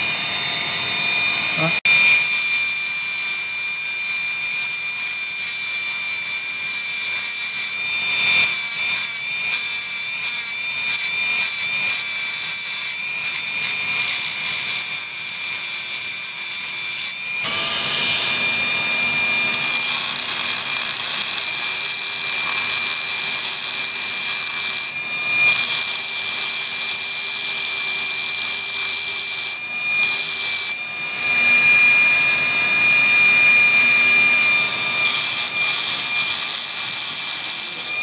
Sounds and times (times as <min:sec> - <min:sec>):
Tools: 0:02.1 - 0:17.2, 0:19.5 - 0:30.8, 0:35.0 - 0:38.0.